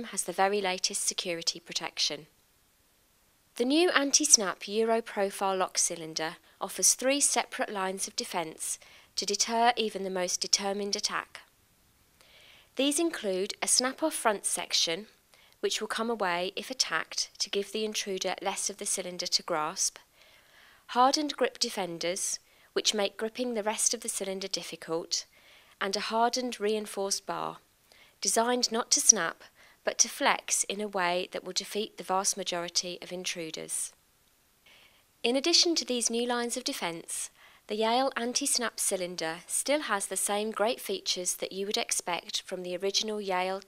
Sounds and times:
Speech: 0:00.0 - 0:02.3, 0:03.6 - 0:11.5, 0:12.8 - 0:20.0, 0:20.9 - 0:27.6, 0:28.2 - 0:34.0, 0:35.3 - 0:43.6.

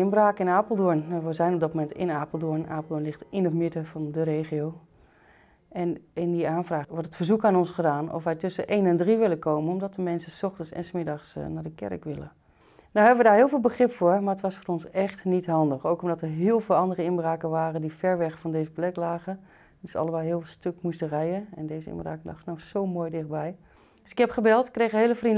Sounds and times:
Speech: 0:00.0 - 0:04.8, 0:05.7 - 0:12.4, 0:13.0 - 0:25.3.

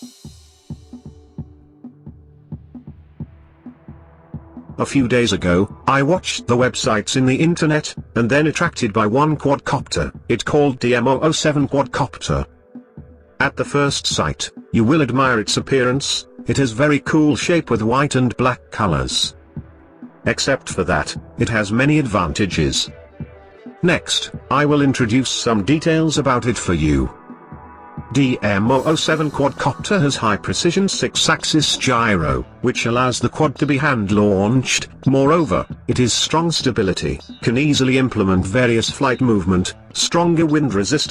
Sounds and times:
Music: 0:00.0 - 0:41.1
Speech: 0:04.8 - 0:12.5, 0:13.4 - 0:19.4, 0:20.2 - 0:23.0, 0:23.8 - 0:27.2, 0:28.1 - 0:41.1.

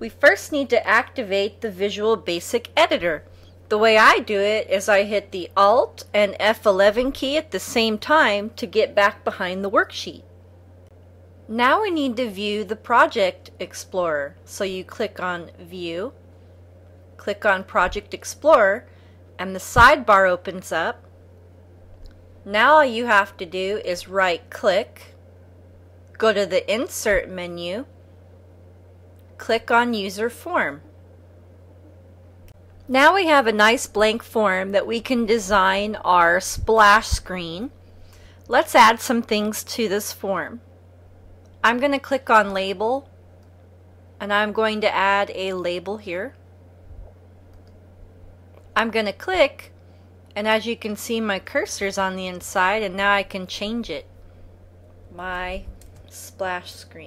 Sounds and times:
Speech: 0:00.0 - 0:10.2, 0:11.5 - 0:16.2, 0:17.2 - 0:18.8, 0:19.4 - 0:21.0, 0:22.5 - 0:25.1, 0:26.2 - 0:27.9, 0:29.4 - 0:30.8, 0:32.9 - 0:37.7, 0:38.5 - 0:40.6, 0:41.6 - 0:43.1, 0:44.2 - 0:46.4, 0:48.8 - 0:49.7, 0:50.4 - 0:54.1, 0:55.1 - 0:57.0.

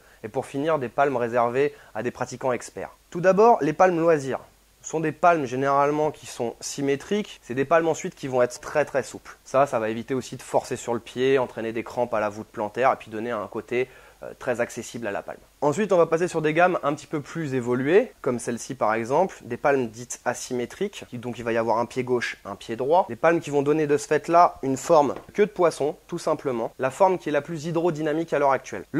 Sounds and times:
Speech: 0:00.0 - 0:28.9.

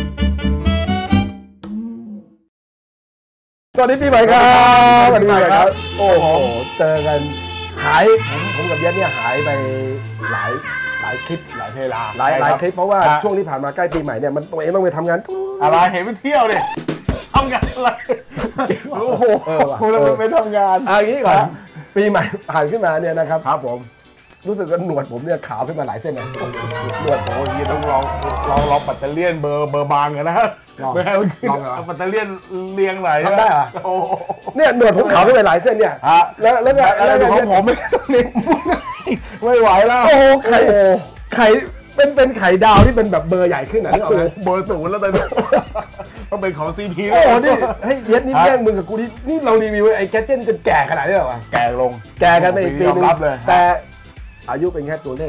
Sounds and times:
Music: 0:00.0 - 0:02.5, 0:03.8 - 0:55.2
Speech: 0:03.8 - 0:16.8, 0:18.9 - 0:33.9, 0:34.6 - 0:38.3, 0:39.4 - 0:45.3, 0:46.3 - 0:53.8, 0:54.5 - 0:55.2.

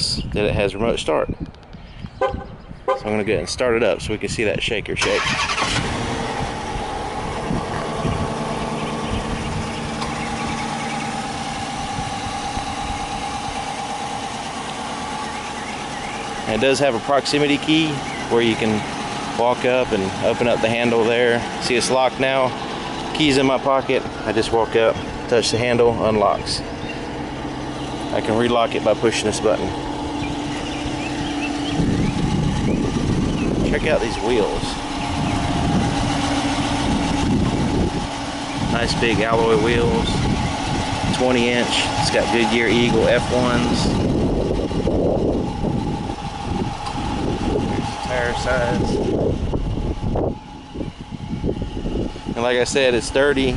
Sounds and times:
Car: 0:00.0 - 0:53.5.

